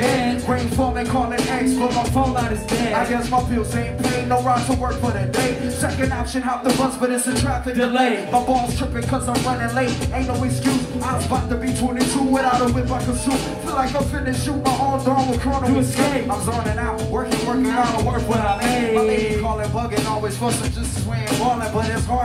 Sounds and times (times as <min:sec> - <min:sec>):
Music: 0:00.0 - 0:22.2.